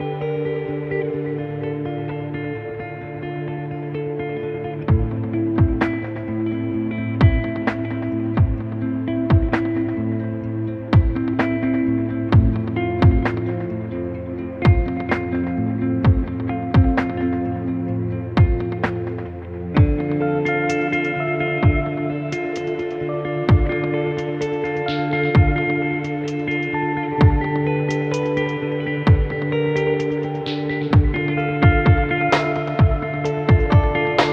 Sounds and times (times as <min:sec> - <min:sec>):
Music: 0:00.0 - 0:34.3.